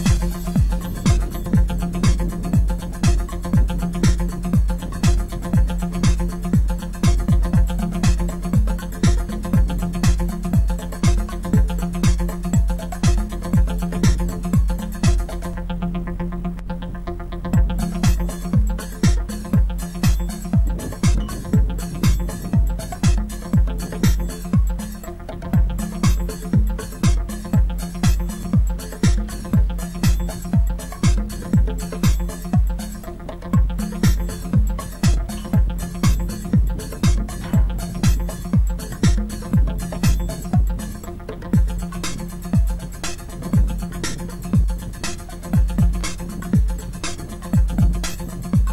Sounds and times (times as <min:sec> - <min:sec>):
Music: 0:00.0 - 0:48.7.